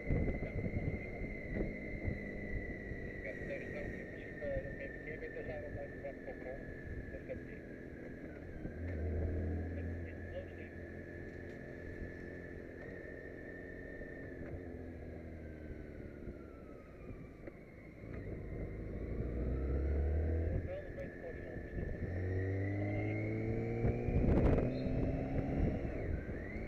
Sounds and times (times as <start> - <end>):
Vehicle: 0.0 - 26.6
Speech: 3.2 - 7.6, 9.7 - 10.7, 20.6 - 21.8.